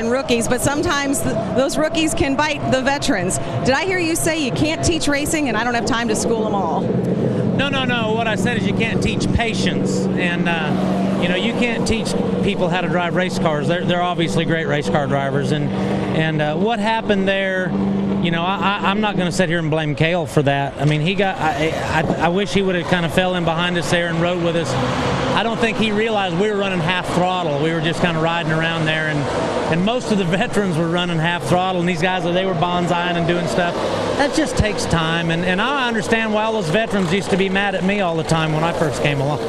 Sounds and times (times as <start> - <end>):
Car: 0.0 - 39.4
Speech: 7.6 - 24.7, 25.4 - 39.4.